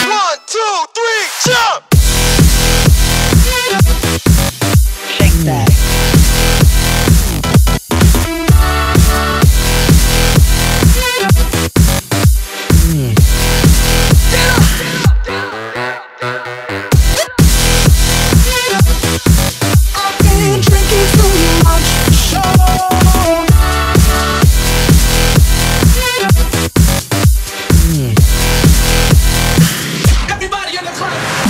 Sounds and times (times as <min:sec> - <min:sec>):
Music: 0:00.0 - 0:31.5.